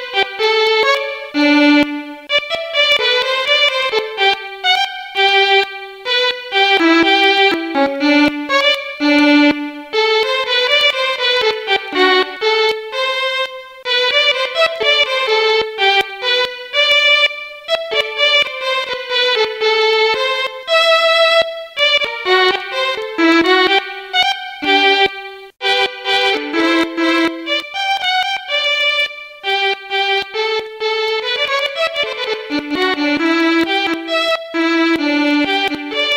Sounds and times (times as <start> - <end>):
Violin, fiddle: 0.0 - 36.1.